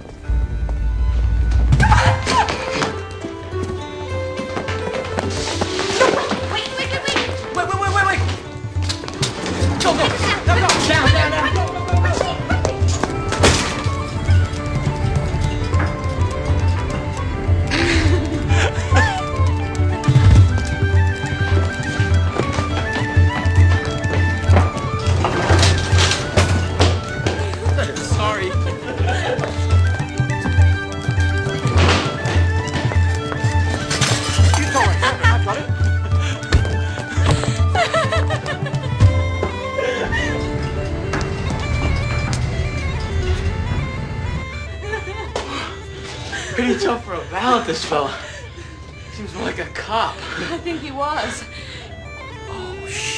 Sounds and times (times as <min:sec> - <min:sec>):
Music: 0:00.0 - 0:53.1.